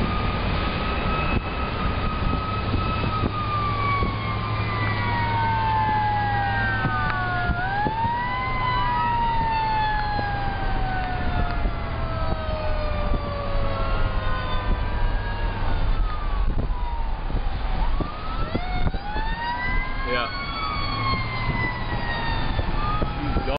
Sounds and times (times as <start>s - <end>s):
Car: 0.0s - 23.5s
Fire engine, fire truck (siren): 0.0s - 23.5s
Truck: 0.0s - 23.5s
Speech: 20.1s - 20.4s.